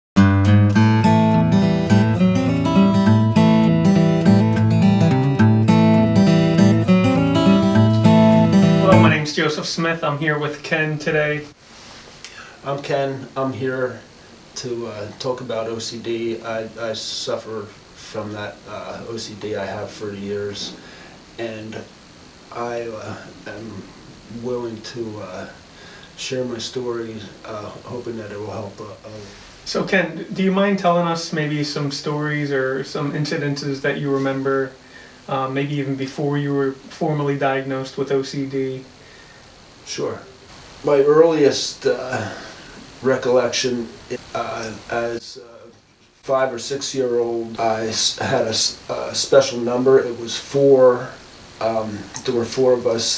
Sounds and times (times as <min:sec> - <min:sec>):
Strum: 0:00.2 - 0:09.4.